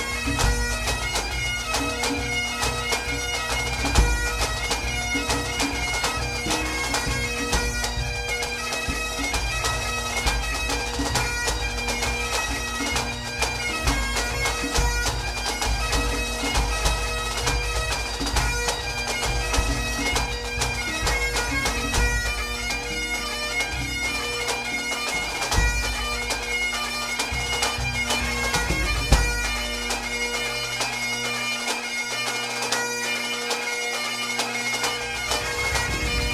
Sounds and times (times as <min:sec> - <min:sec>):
Music: 0:00.0 - 0:36.3.